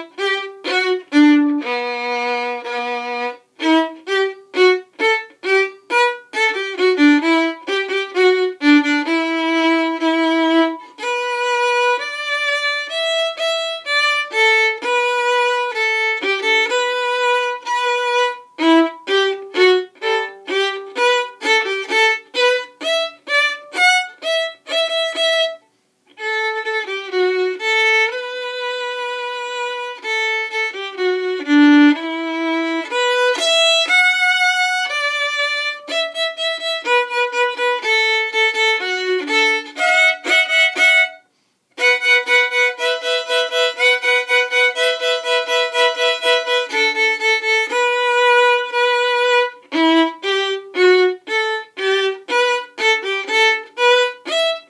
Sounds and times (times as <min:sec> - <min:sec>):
Violin, fiddle: 0:00.0 - 0:54.7.